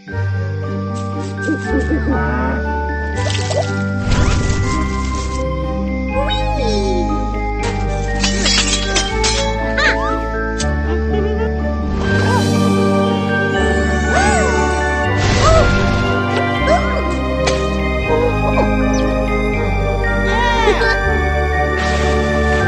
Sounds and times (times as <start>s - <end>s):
Music for children: 0.0s - 22.6s.